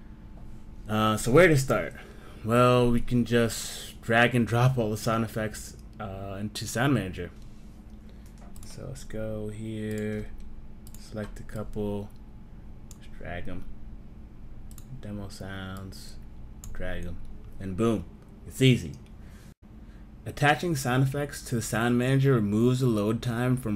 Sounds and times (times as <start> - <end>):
Speech: 0.9 - 7.4, 8.6 - 10.4, 11.0 - 12.1, 13.0 - 13.7, 14.8 - 19.0, 20.3 - 23.7.